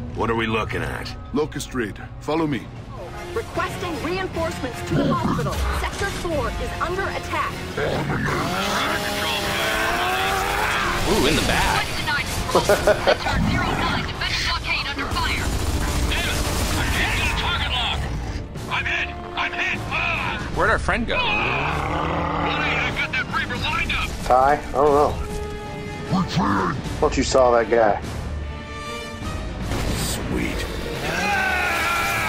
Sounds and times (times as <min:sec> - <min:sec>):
Music: 0:00.0 - 0:32.2.